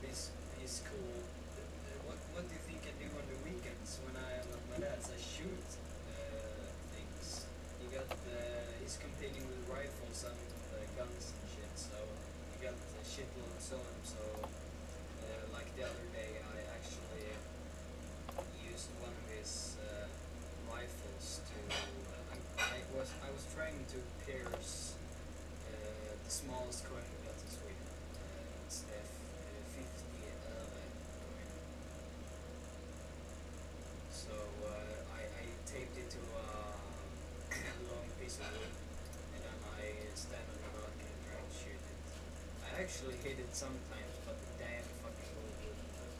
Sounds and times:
Speech: 0:00.0 - 0:14.5, 0:15.2 - 0:17.5, 0:18.4 - 0:25.0, 0:25.6 - 0:31.6, 0:34.1 - 0:46.1.

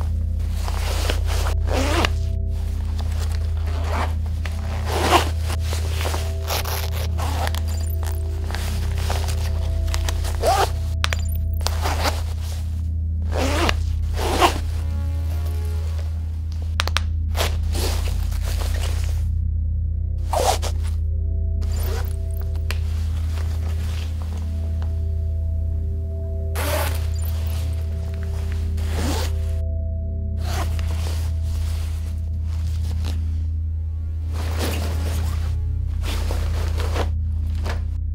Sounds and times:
Music: 0:00.0 - 0:38.1.

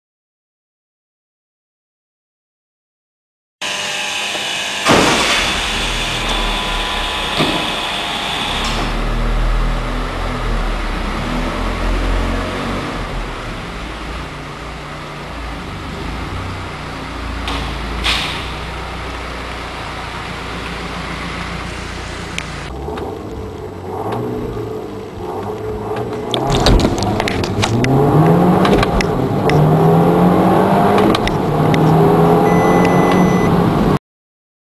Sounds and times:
Car: 0:03.6 - 0:34.0.

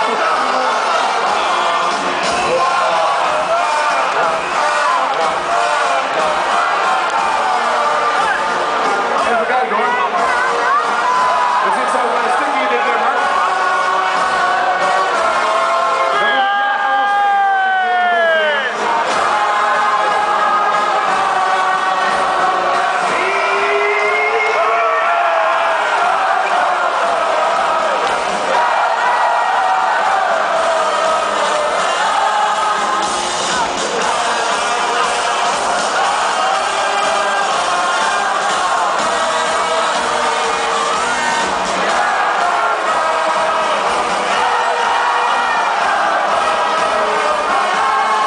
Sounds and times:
Music: 0:00.0 - 0:48.2
Speech: 0:09.2 - 0:13.3.

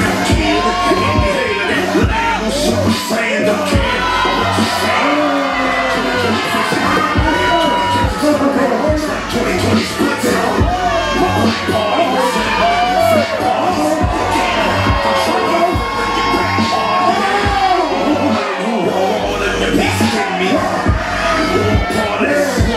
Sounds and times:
Inside, public space: 0:00.0 - 0:22.7
Music: 0:00.0 - 0:22.7.

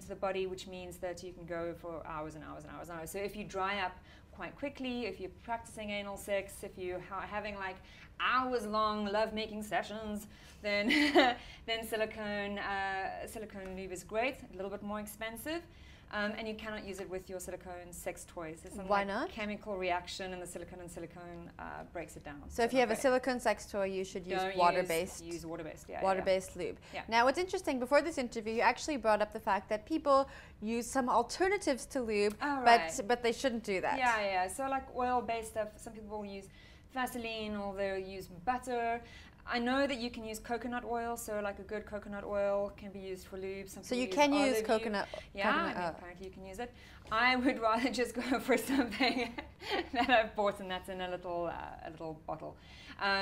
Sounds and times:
Inside, small room: 0:00.0 - 0:53.2.

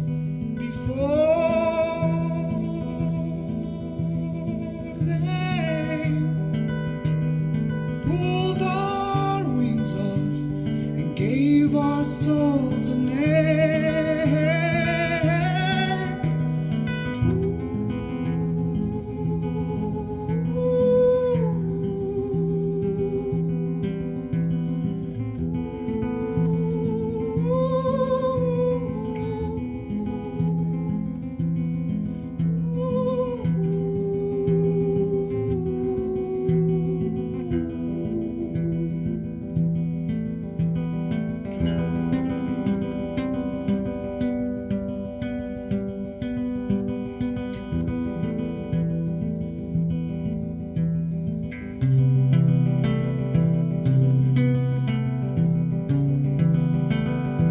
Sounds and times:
Acoustic guitar: 0:00.0 - 0:57.5
Singing: 0:00.6 - 0:06.7, 0:07.9 - 0:24.3, 0:25.2 - 0:31.4, 0:32.4 - 0:39.6.

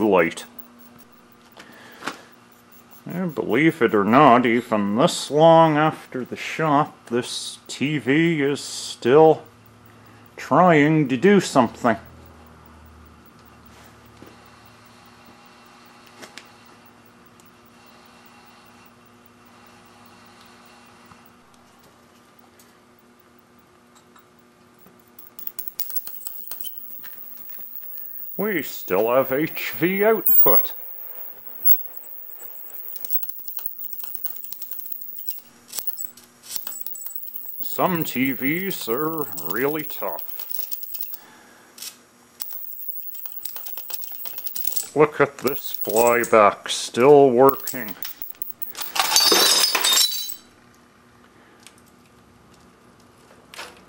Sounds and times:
Speech: 0:00.0 - 0:00.5, 0:03.1 - 0:09.4, 0:10.4 - 0:12.1, 0:45.0 - 0:48.0.

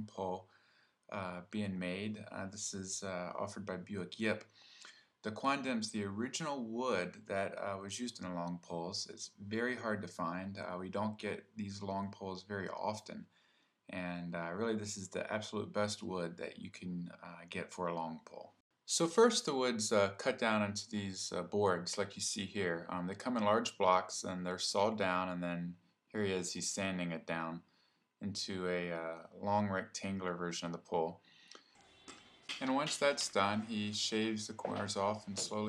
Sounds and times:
Speech: 0:00.0 - 0:00.5, 0:01.1 - 0:04.5, 0:05.3 - 0:13.3, 0:13.9 - 0:27.6, 0:28.2 - 0:31.2, 0:32.5 - 0:35.6.

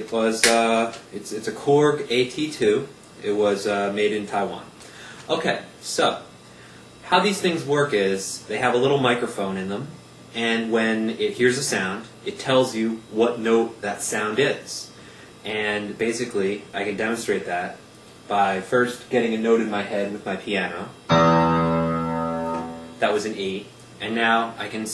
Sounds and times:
Speech: 0:00.0 - 0:06.3, 0:07.0 - 0:21.0, 0:23.0 - 0:24.9
Musical instrument: 0:21.1 - 0:23.1.

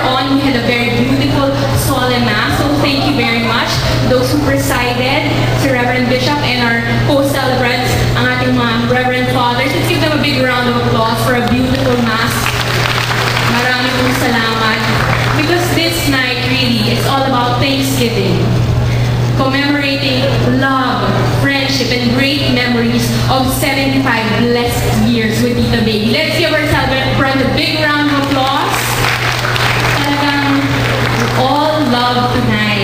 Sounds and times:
Speech: 0:00.0 - 0:12.4, 0:13.5 - 0:18.6, 0:19.4 - 0:28.8, 0:30.0 - 0:32.8
Inside, large room or hall: 0:00.0 - 0:32.8.

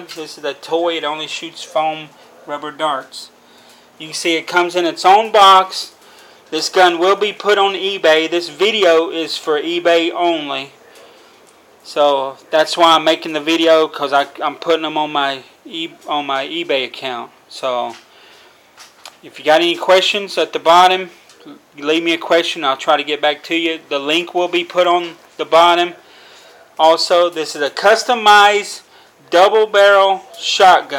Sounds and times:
Speech: 0:00.0 - 0:03.4, 0:04.0 - 0:10.8, 0:11.8 - 0:18.1, 0:19.2 - 0:26.1, 0:26.8 - 0:30.9.

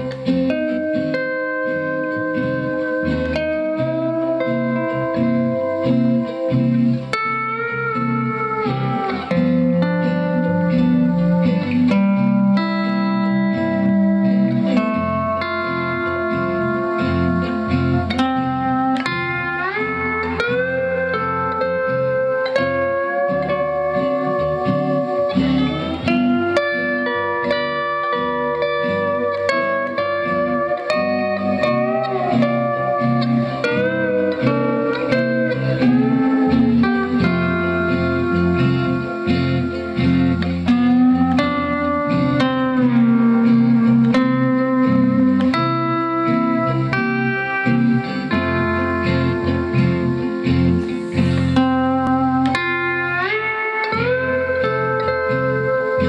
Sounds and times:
Guitar: 0:00.0 - 0:56.0.

